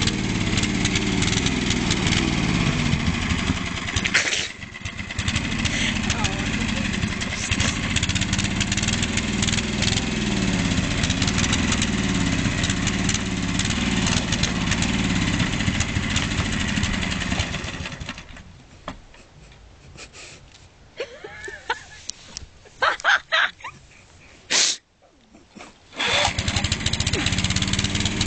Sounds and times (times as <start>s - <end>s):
Lawn mower: 0.0s - 18.5s, 25.9s - 28.2s.